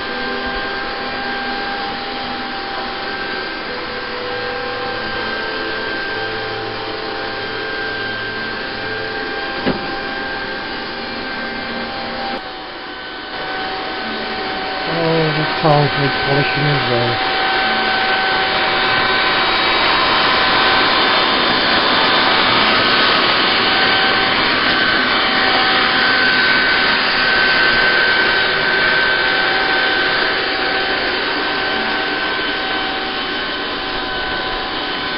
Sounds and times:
Vacuum cleaner: 0.0s - 16.2s, 17.2s - 35.1s.

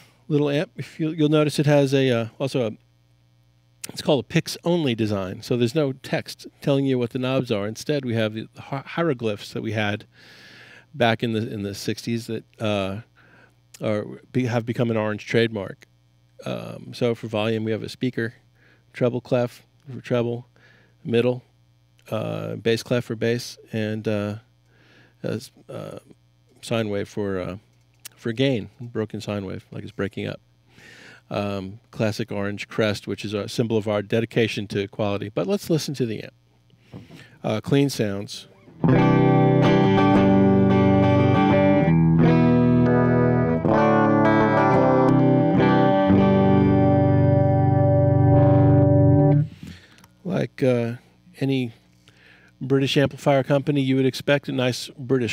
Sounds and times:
Distortion: 0.0s - 55.3s
Speech: 0.3s - 2.8s, 3.8s - 10.1s, 11.0s - 13.1s, 13.8s - 24.5s, 25.2s - 30.4s, 31.3s - 36.4s, 37.4s - 38.5s, 50.2s - 51.8s, 52.6s - 55.3s
Guitar: 3.8s - 18.0s, 36.8s - 53.6s
Effects unit: 38.5s - 50.2s.

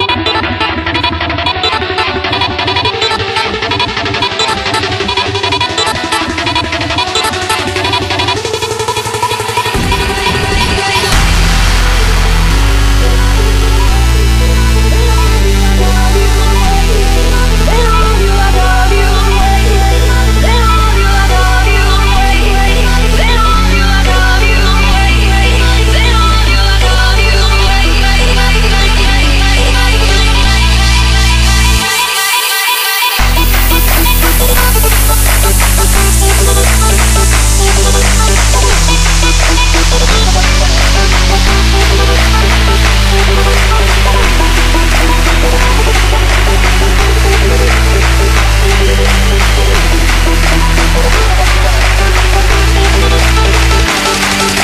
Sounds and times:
Dubstep: 0.0s - 54.6s.

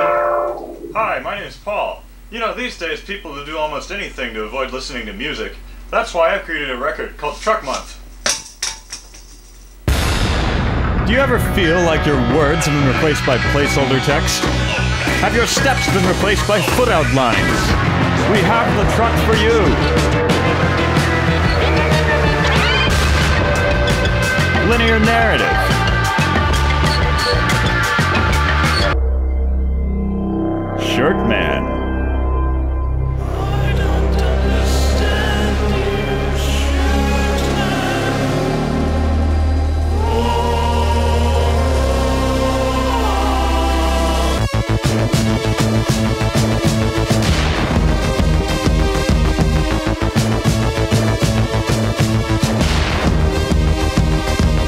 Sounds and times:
Music: 0.0s - 1.0s, 9.8s - 54.6s
Speech: 1.0s - 8.0s, 11.0s - 14.5s, 15.2s - 19.8s, 24.6s - 25.7s, 30.8s - 31.8s.

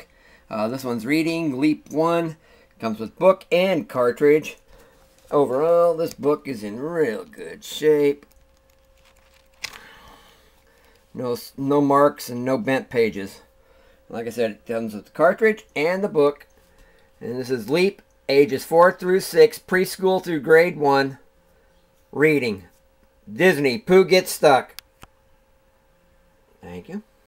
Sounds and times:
Speech: 0.0s - 4.6s, 5.3s - 8.3s, 11.2s - 13.5s, 14.1s - 16.5s, 17.2s - 21.2s, 22.1s - 24.8s, 26.6s - 27.2s.

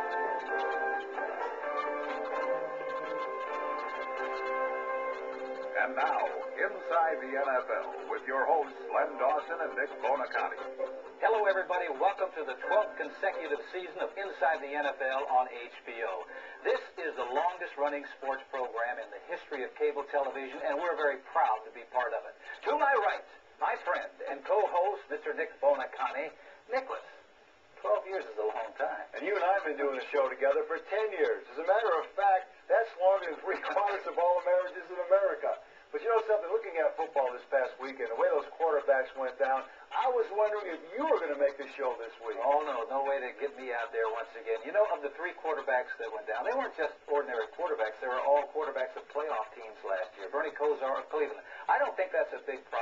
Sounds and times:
Speech: 5.8s - 27.2s, 27.8s - 52.8s.

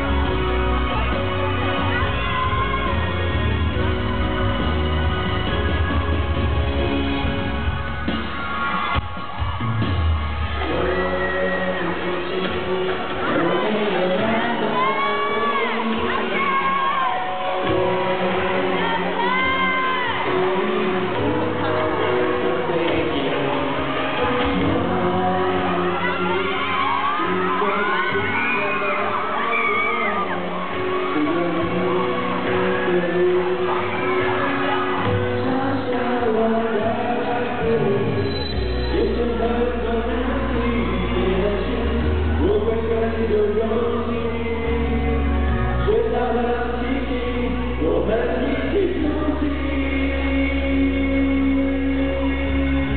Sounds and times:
Music: 0.0s - 52.9s.

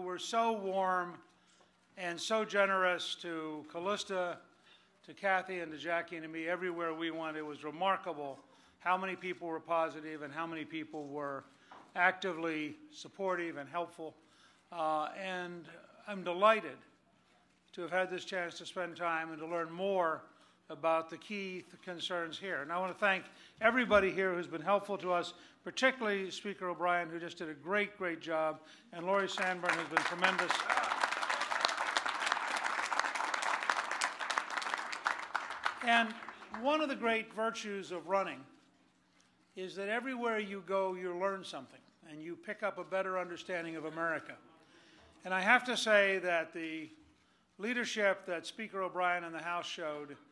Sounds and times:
Male speech, man speaking: 0.0s - 1.2s, 2.0s - 4.4s, 5.1s - 11.4s, 12.0s - 14.2s, 14.8s - 16.8s, 17.8s - 31.0s, 35.8s - 38.5s, 39.6s - 44.4s, 45.2s - 47.0s, 47.6s - 50.2s
Narration, monologue: 0.0s - 50.3s.

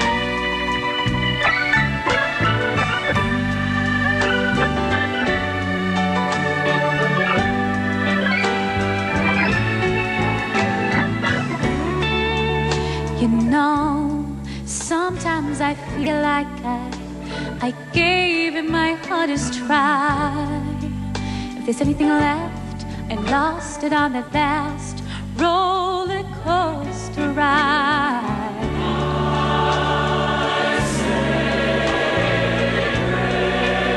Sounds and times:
Hammond organ: 0.0s - 13.4s, 16.0s - 21.2s, 28.6s - 33.9s.

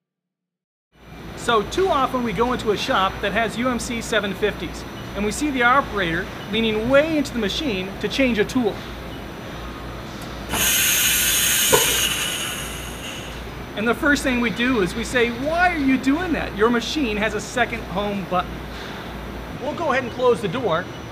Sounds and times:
Speech: 1.4s - 8.8s, 13.8s - 18.5s, 19.6s - 21.0s.

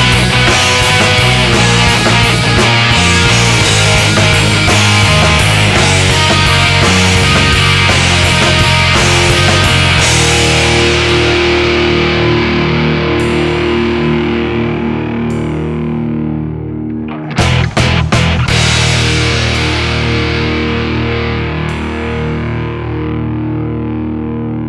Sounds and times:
Rimshot: 0.0s - 11.4s, 17.2s - 20.9s
Drum kit: 0.0s - 16.1s, 17.1s - 22.6s.

